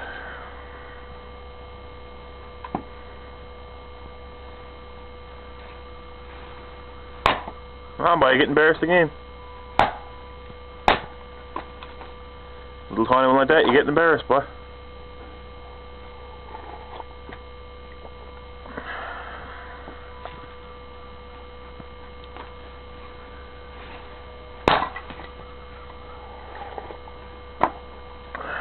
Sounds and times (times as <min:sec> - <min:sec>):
Speech: 0:08.0 - 0:09.2, 0:12.9 - 0:14.6.